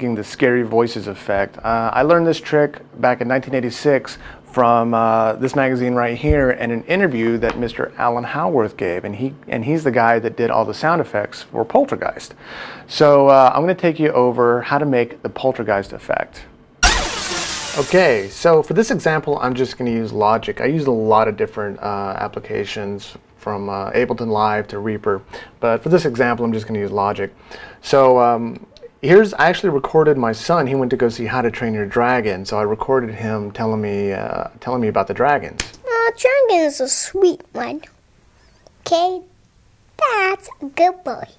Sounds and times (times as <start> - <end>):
Speech: 0.0 - 16.5, 17.8 - 37.9, 40.0 - 41.3.